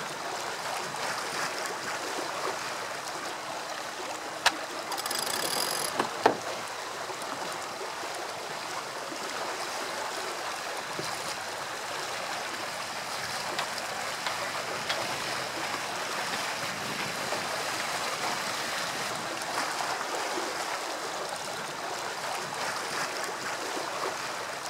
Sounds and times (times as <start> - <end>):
Ocean: 0.0 - 24.7
Sailboat, sailing ship: 0.0 - 24.7.